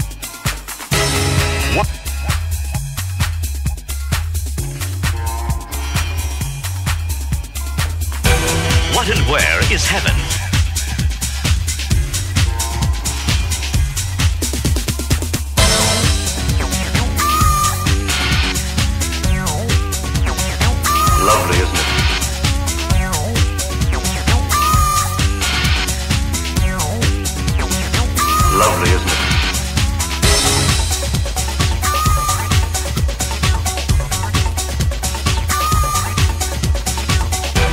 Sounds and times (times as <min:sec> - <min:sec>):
Techno: 0:00.0 - 0:37.7.